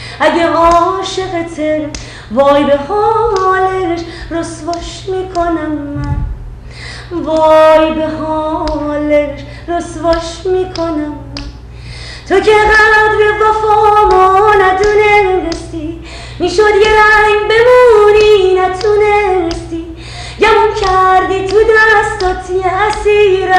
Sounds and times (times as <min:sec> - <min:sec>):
Female singing: 0:00.2 - 0:06.0, 0:07.1 - 0:11.5, 0:12.3 - 0:23.5.